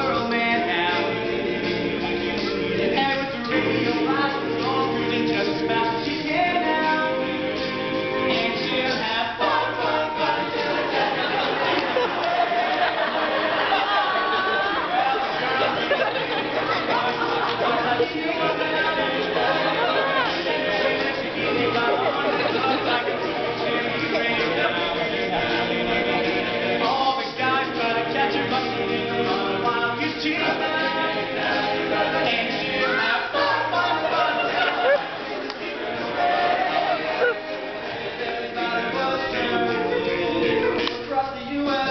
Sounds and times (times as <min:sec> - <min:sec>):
Crowd: 0:00.0 - 0:41.9
Music: 0:00.0 - 0:41.9.